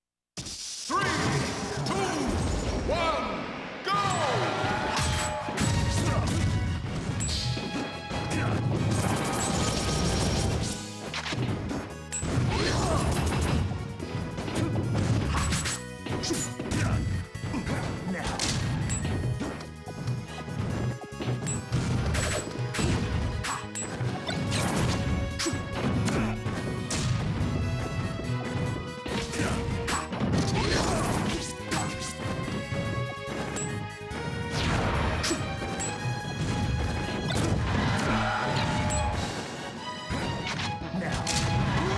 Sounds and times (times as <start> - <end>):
Music: 1.0 - 41.9.